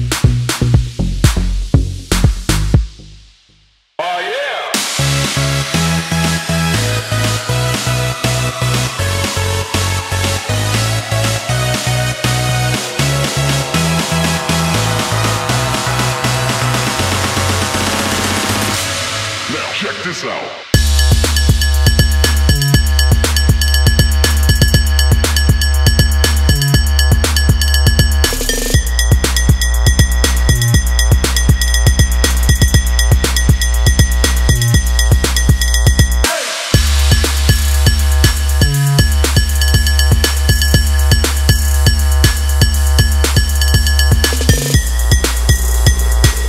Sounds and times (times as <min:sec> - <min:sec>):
Music: 0:00.0 - 0:46.4.